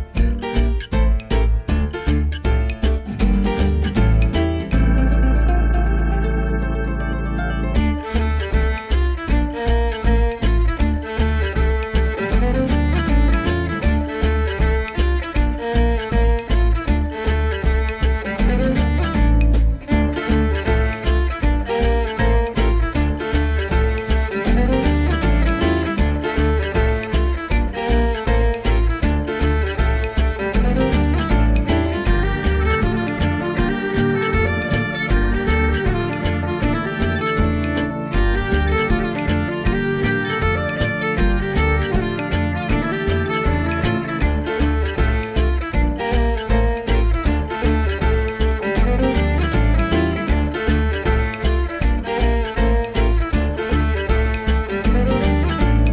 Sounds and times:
Rhythm and blues: 0:00.0 - 0:55.9.

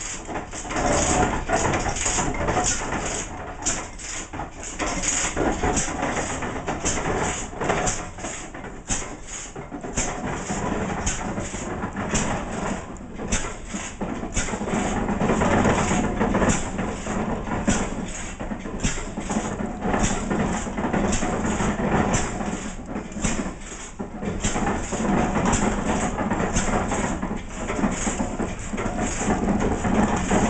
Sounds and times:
Engine: 0:00.0 - 0:30.4.

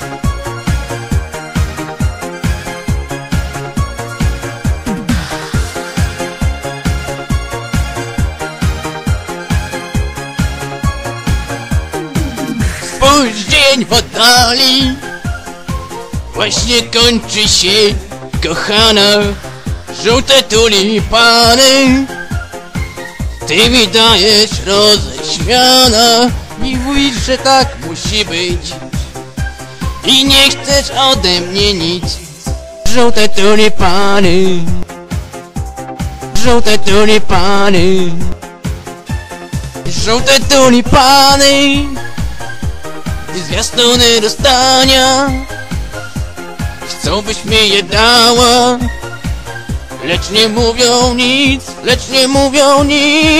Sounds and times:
Music: 0:00.0 - 0:53.3.

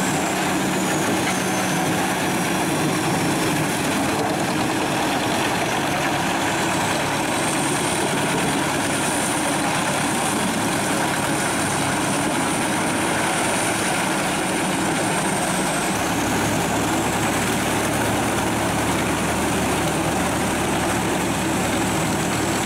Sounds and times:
Heavy engine (low frequency): 0:00.0 - 0:22.6
Vehicle: 0:00.0 - 0:22.6.

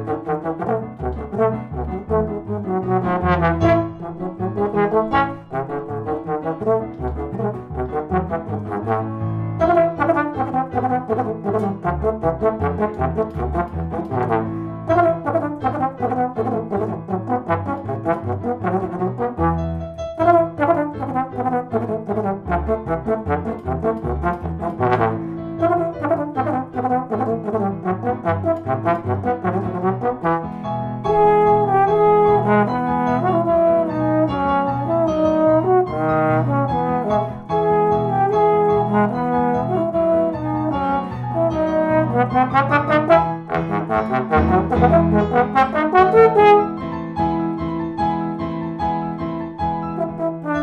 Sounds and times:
Trombone: 0:00.0 - 0:47.6, 0:49.9 - 0:50.6.

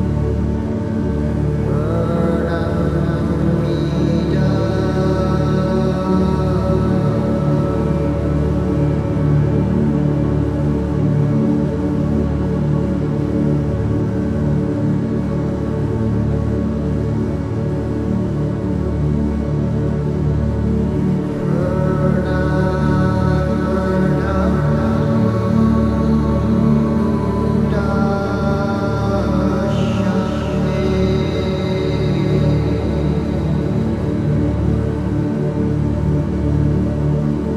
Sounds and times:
Mantra: 0:01.7 - 0:08.8, 0:21.4 - 0:34.2.

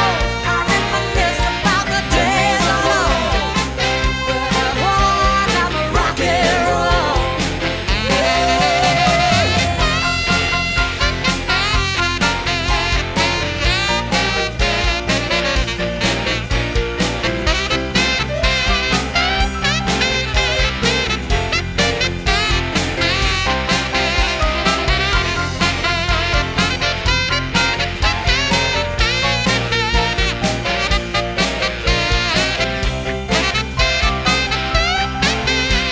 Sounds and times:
Music: 0:00.0 - 0:35.9.

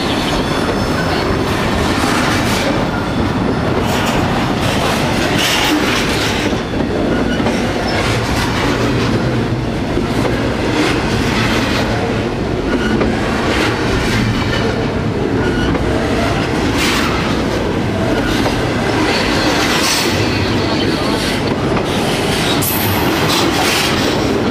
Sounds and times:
Clickety-clack: 0:00.0 - 0:24.5
Railroad car, train wagon: 0:00.0 - 0:24.5
Train: 0:00.0 - 0:24.5.

